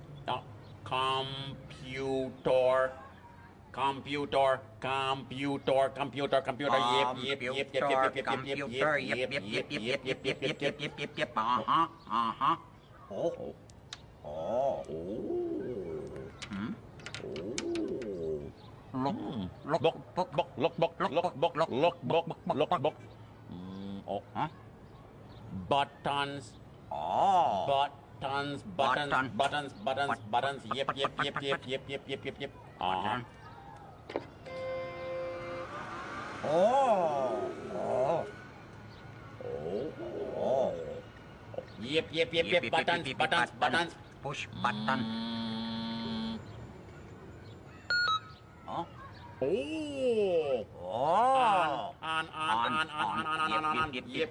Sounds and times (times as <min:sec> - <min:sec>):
Speech: 0:00.3 - 0:09.6, 0:48.7 - 0:54.3.